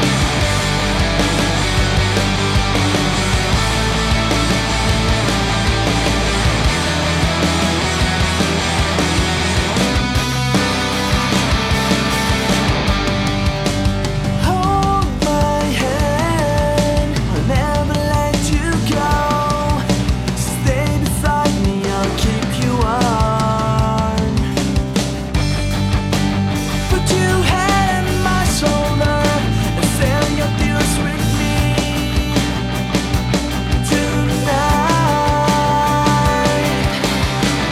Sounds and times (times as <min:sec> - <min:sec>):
Theme music: 0:00.0 - 0:14.4.